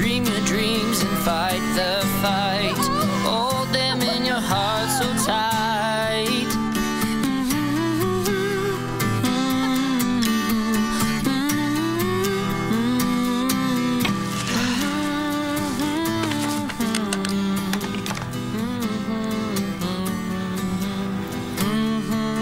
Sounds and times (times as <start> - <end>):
Background music: 0.0 - 22.4.